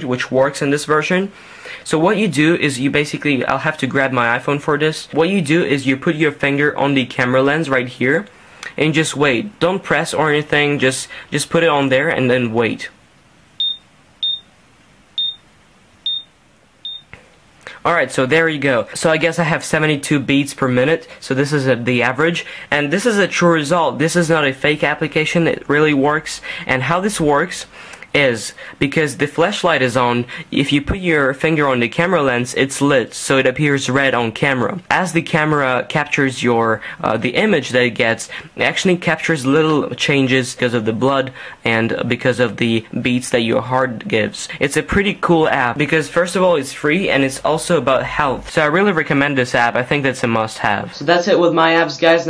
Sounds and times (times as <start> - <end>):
Speech: 0.0 - 13.0, 17.7 - 52.2
Inside, small room: 0.0 - 52.2.